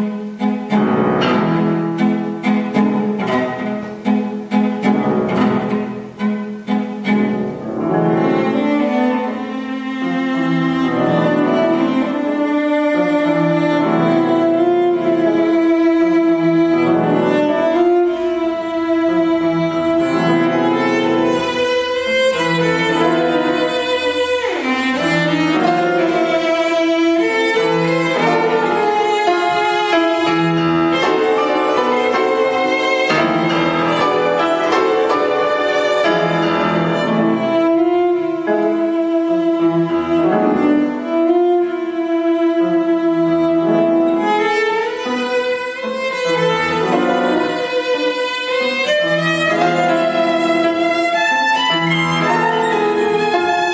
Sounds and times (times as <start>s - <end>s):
Cello: 0.0s - 53.7s
Piano: 0.0s - 53.7s.